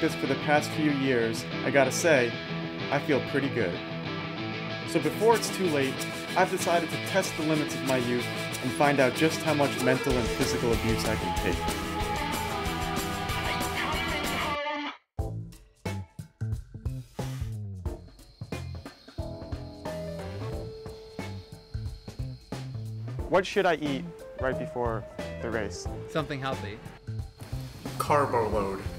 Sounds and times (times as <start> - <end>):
Speech: 0.0 - 3.8, 4.9 - 11.6, 23.3 - 26.8, 28.0 - 28.9
Music: 0.0 - 28.9.